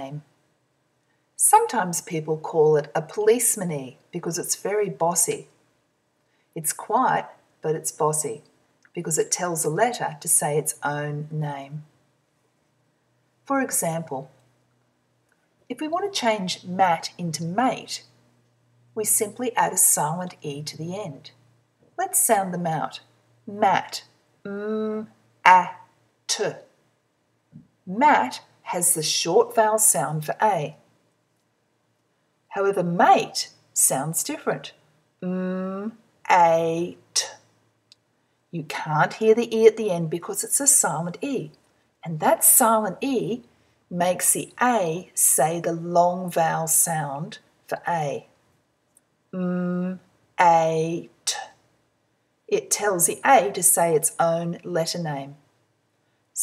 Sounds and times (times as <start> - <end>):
Speech: 0.0 - 0.3, 1.4 - 5.6, 6.6 - 11.9, 13.4 - 14.4, 15.7 - 18.1, 19.0 - 21.4, 22.0 - 26.7, 27.9 - 30.8, 32.5 - 37.4, 38.6 - 48.3, 49.4 - 51.5, 52.5 - 55.4.